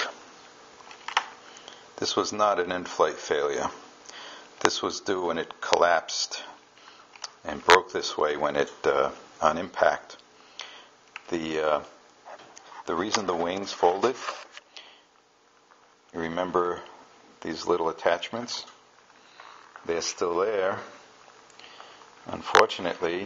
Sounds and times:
Speech: 2.0s - 3.8s, 4.6s - 6.6s, 7.4s - 10.2s, 11.3s - 12.0s, 12.9s - 14.4s, 16.1s - 18.8s, 19.8s - 21.0s, 22.2s - 23.2s.

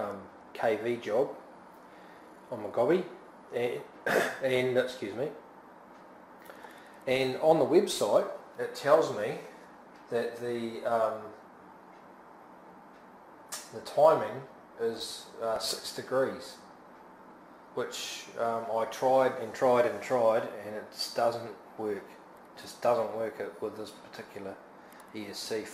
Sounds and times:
Speech: 0.0s - 1.4s, 2.5s - 5.4s, 7.1s - 11.4s, 13.6s - 16.7s, 17.8s - 25.7s
Inside, small room: 0.0s - 25.7s.

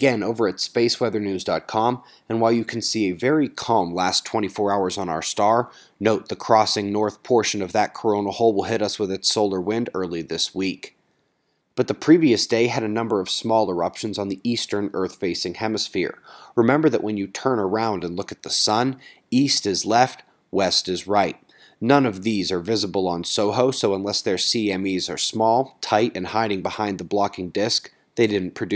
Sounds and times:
Speech: 0.0s - 11.0s, 11.8s - 28.7s.

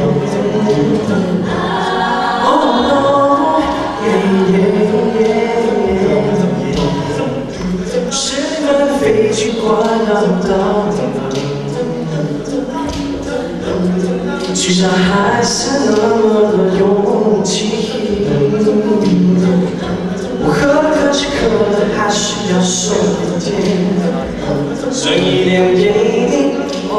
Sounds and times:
Choir: 0.0s - 26.9s
Male singing: 0.0s - 26.9s.

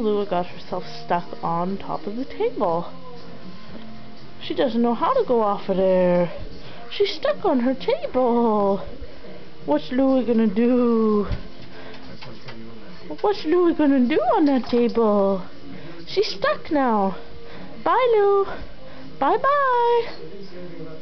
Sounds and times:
Speech: 0.0s - 2.9s, 4.4s - 11.4s, 12.1s - 18.6s, 19.2s - 21.0s.

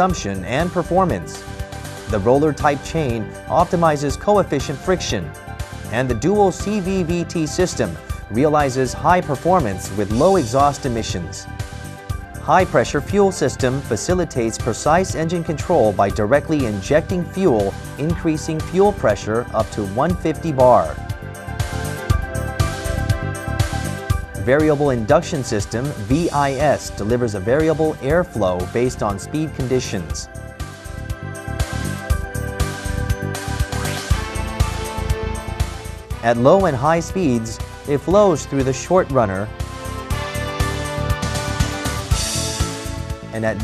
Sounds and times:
Speech: 0.0s - 1.4s, 2.1s - 5.3s, 5.9s - 11.4s, 12.5s - 21.0s, 24.4s - 30.3s, 36.2s - 39.5s, 43.3s - 43.6s
Music: 0.0s - 43.6s.

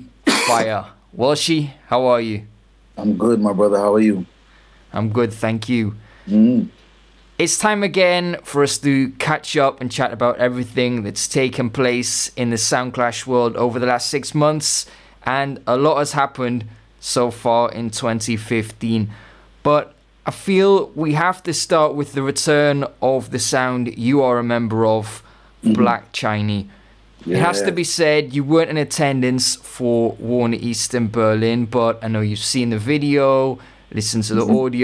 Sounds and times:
Speech: 0.0s - 4.3s, 4.9s - 6.7s, 7.4s - 34.8s.

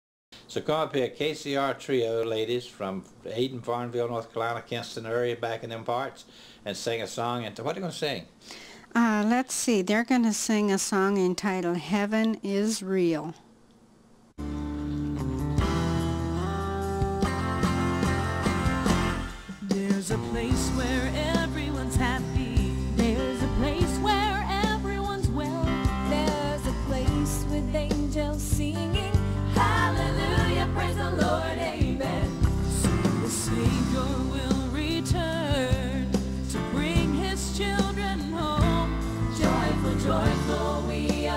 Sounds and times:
Gospel music: 14.4s - 41.3s.

